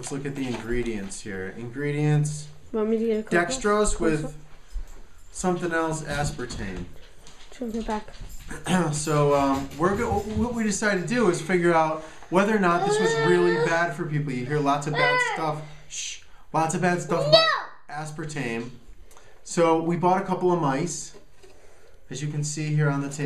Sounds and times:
Speech: 0.0 - 4.4, 8.6 - 18.8, 22.1 - 23.2.

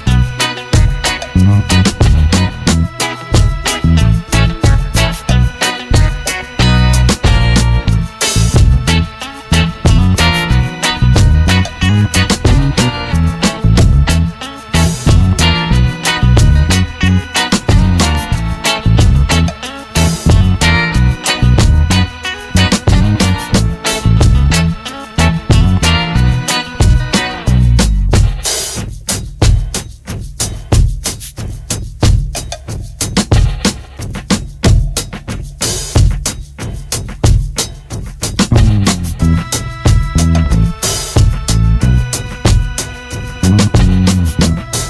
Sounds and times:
Bass drum: 0.0 - 44.8
Drum kit: 0.0 - 44.8.

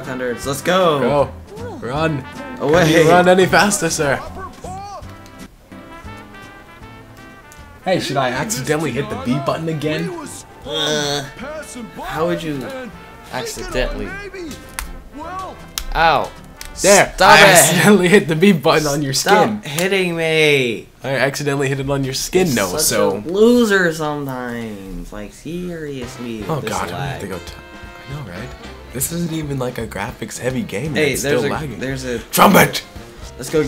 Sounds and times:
Music: 0.0 - 19.6, 21.2 - 24.1, 24.7 - 33.6.

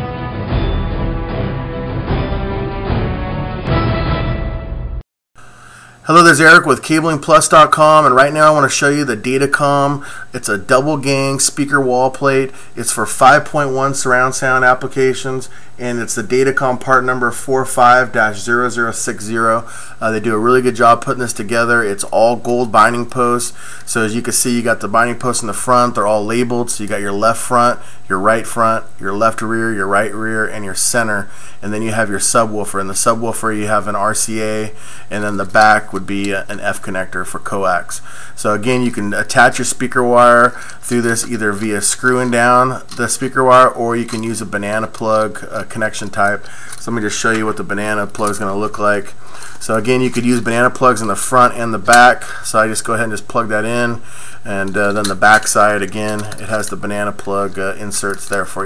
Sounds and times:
Speech: 6.0 - 58.6.

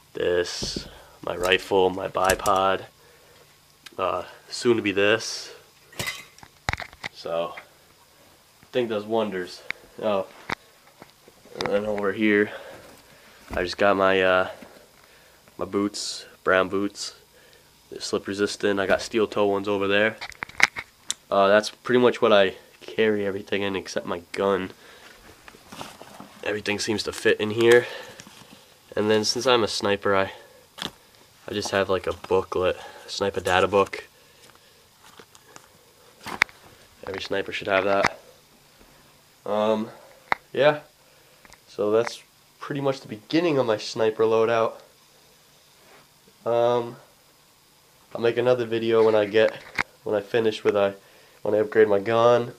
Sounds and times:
Inside, small room: 0.0 - 52.5
Speech: 0.1 - 2.9, 3.9 - 5.7, 7.2 - 7.7, 8.7 - 10.4, 11.6 - 12.7, 13.6 - 14.6, 15.6 - 17.2, 17.9 - 20.2, 21.3 - 24.8, 26.4 - 28.0, 28.9 - 30.4, 31.4 - 34.1, 37.0 - 38.2, 39.4 - 40.9, 41.7 - 44.9, 46.4 - 47.1, 48.1 - 52.5.

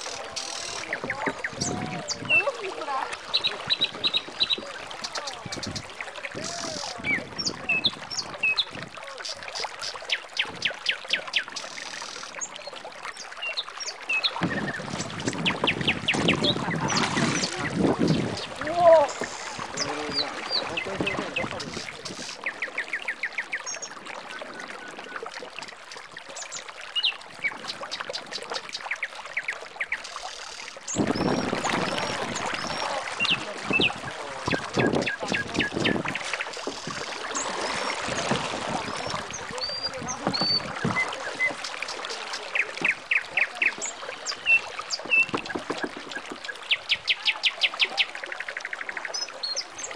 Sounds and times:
Rowboat, canoe, kayak: 0.0 - 49.9
Speech: 0.1 - 9.6, 16.6 - 22.2, 31.7 - 36.0, 38.7 - 44.2.

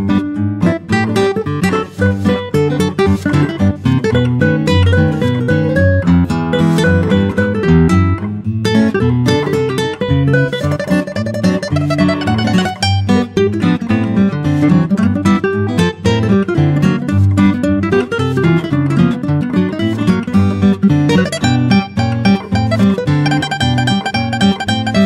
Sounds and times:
Acoustic guitar: 0.0 - 25.0
Strum: 0.0 - 25.0.

